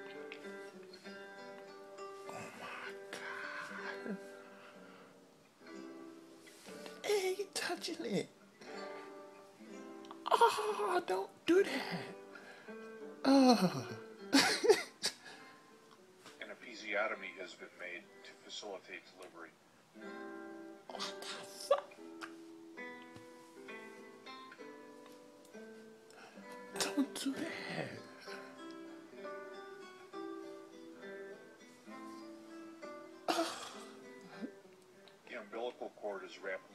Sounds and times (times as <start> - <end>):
Inside, small room: 0.0 - 36.7
Music: 0.0 - 36.7
Speech: 7.0 - 8.3, 10.3 - 12.0, 16.4 - 19.5, 35.3 - 36.7.